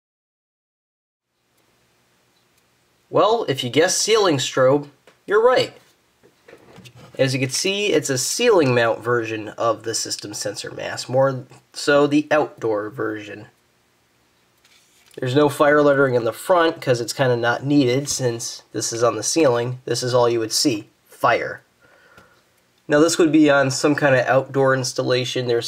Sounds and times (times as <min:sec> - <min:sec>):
Speech: 0:03.1 - 0:05.9, 0:07.2 - 0:13.6, 0:15.2 - 0:21.7, 0:22.9 - 0:25.6.